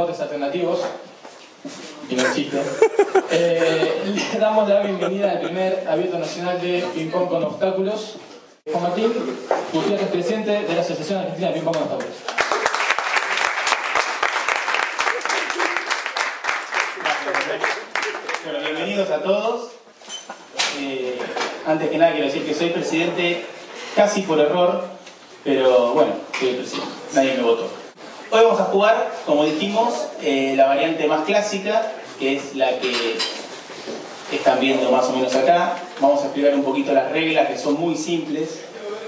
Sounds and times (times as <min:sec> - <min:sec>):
Speech: 0:01.9 - 0:02.7, 0:03.3 - 0:12.2, 0:18.4 - 0:19.8, 0:20.7 - 0:33.4, 0:34.3 - 0:39.0.